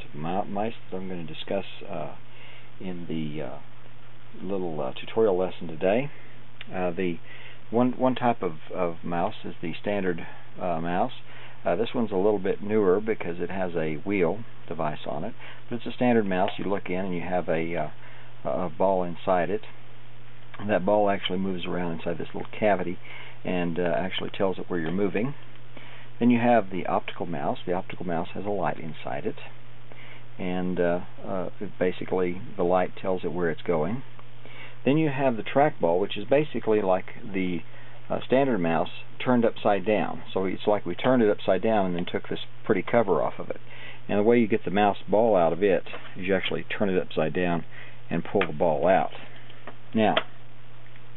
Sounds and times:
Speech: 0:00.0 - 0:02.2, 0:02.8 - 0:03.7, 0:04.3 - 0:19.8, 0:20.6 - 0:25.4, 0:26.2 - 0:29.6, 0:30.4 - 0:34.1, 0:34.8 - 0:49.3, 0:49.9 - 0:50.3.

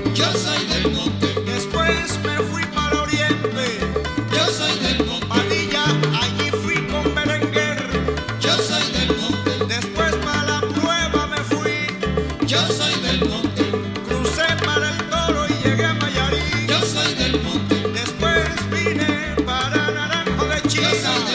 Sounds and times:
Salsa music: 0:00.0 - 0:21.3
Singing: 0:00.1 - 0:02.1, 0:04.3 - 0:06.5, 0:08.4 - 0:09.9, 0:12.5 - 0:18.3, 0:19.8 - 0:21.3.

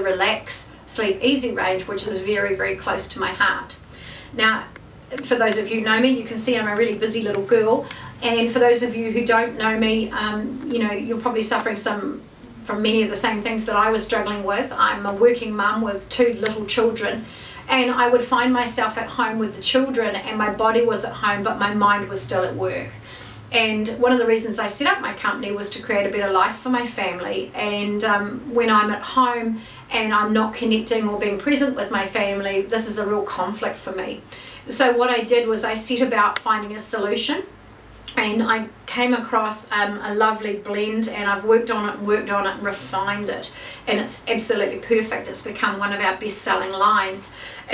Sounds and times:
Speech: 0:00.0 - 0:03.8, 0:04.4 - 0:47.7.

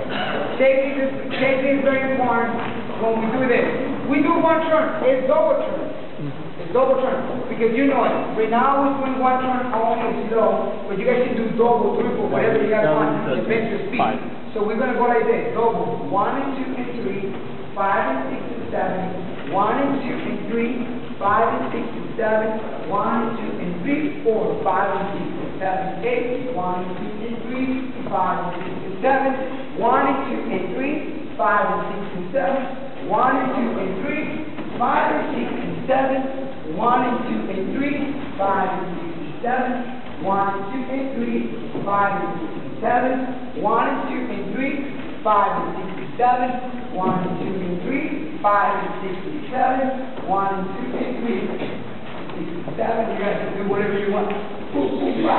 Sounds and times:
Speech: 0:00.0 - 0:55.3.

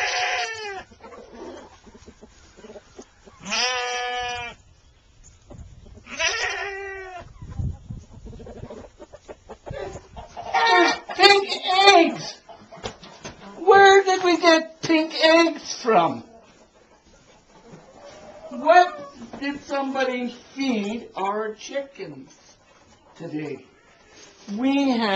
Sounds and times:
Chicken, rooster: 0:00.0 - 0:04.6, 0:05.4 - 0:11.3, 0:12.4 - 0:13.6, 0:16.2 - 0:19.4, 0:22.5 - 0:24.4.

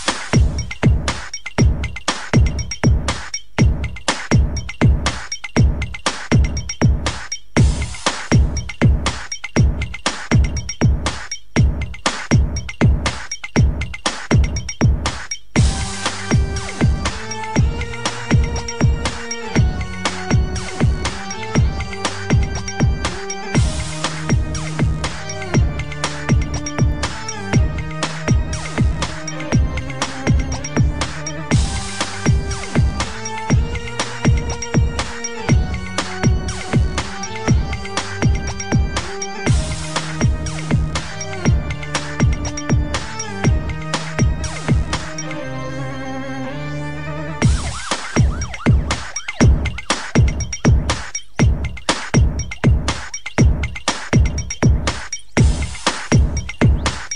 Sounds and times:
Dubstep: 0:00.0 - 0:45.9, 0:47.2 - 0:57.1.

